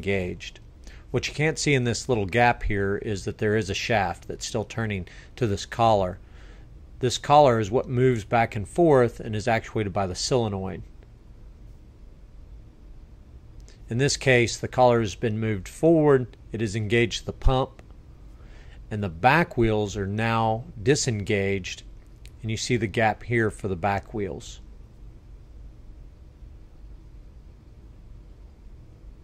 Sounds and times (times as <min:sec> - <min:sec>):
Speech: 0:00.0 - 0:06.2, 0:07.0 - 0:10.9, 0:13.9 - 0:17.8, 0:18.9 - 0:24.7.